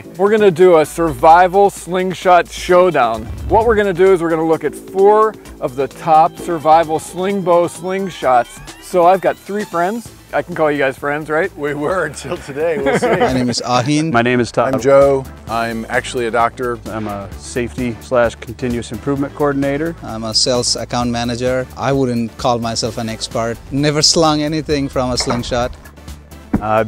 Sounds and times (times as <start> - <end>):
Speech: 0.0 - 25.8, 26.6 - 26.8
Music: 0.0 - 26.8.